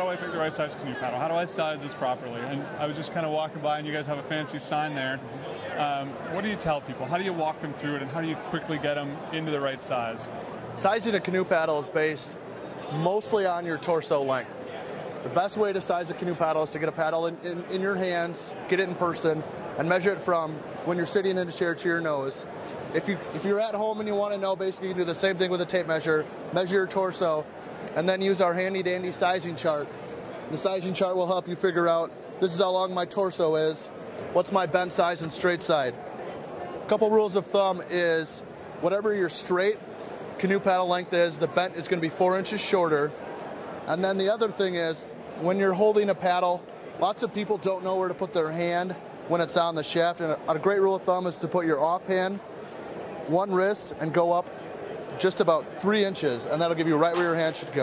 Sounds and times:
Speech: 0.0s - 29.9s, 30.5s - 36.0s, 36.9s - 39.8s, 40.4s - 43.1s, 43.9s - 52.4s, 55.2s - 57.8s.

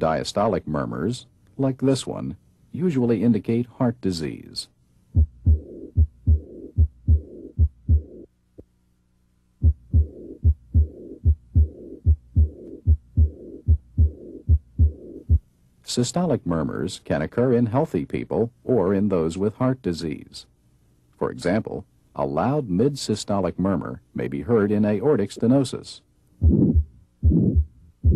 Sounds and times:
Heart sounds, heartbeat: 5.2s - 8.2s, 9.6s - 15.4s, 26.4s - 28.1s.

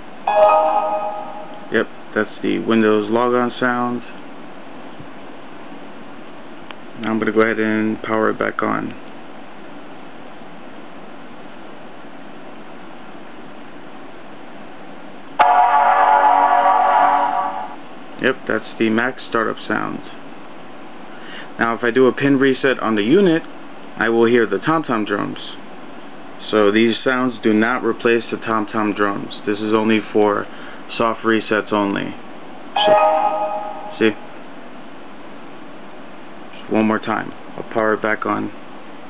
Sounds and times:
Speech: 1.7s - 4.2s, 7.0s - 9.0s, 18.2s - 20.2s, 21.6s - 25.6s, 26.4s - 32.2s, 34.0s - 34.2s, 36.6s - 38.6s.

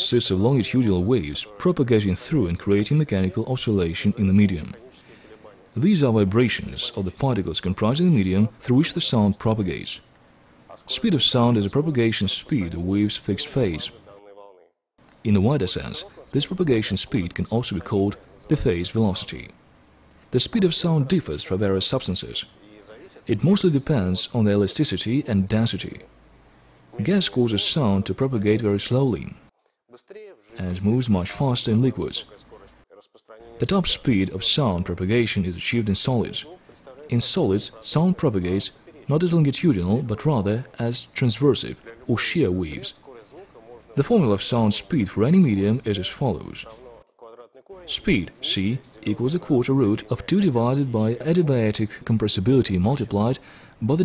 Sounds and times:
Speech: 0.0s - 10.1s, 10.7s - 14.5s, 15.2s - 19.6s, 20.3s - 26.1s, 27.0s - 54.0s.

